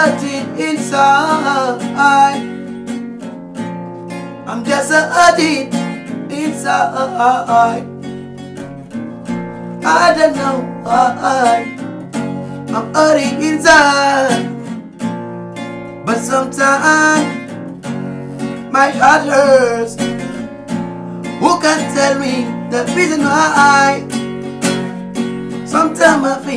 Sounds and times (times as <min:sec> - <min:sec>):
Music: 0:00.0 - 0:26.5.